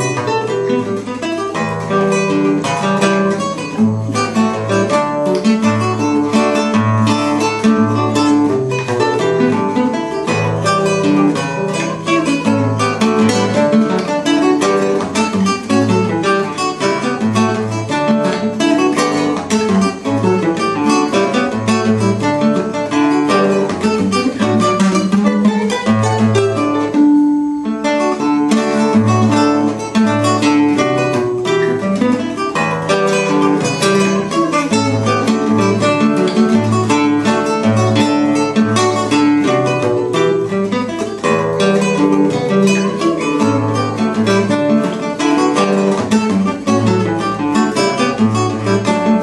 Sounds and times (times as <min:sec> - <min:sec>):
Acoustic guitar: 0:00.0 - 0:49.2.